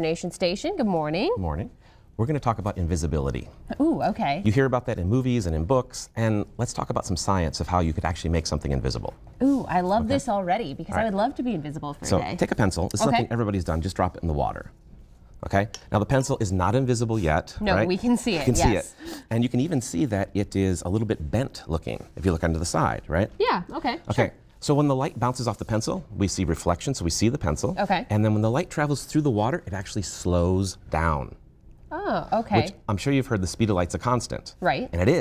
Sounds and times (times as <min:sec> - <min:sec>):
Speech: 0:12.0 - 0:14.6, 0:15.4 - 0:28.6, 0:32.0 - 0:35.2.